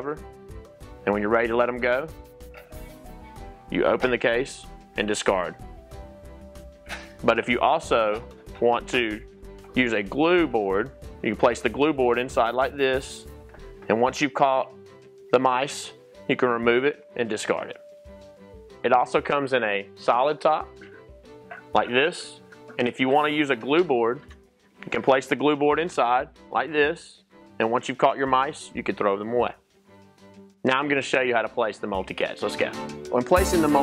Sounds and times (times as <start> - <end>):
Speech: 0.0 - 0.2, 1.0 - 2.1, 3.7 - 5.6, 7.2 - 9.2, 9.8 - 13.3, 13.9 - 14.7, 15.3 - 17.8, 18.8 - 20.7, 21.7 - 24.2, 24.8 - 29.6, 30.7 - 33.8
Music: 0.0 - 33.8.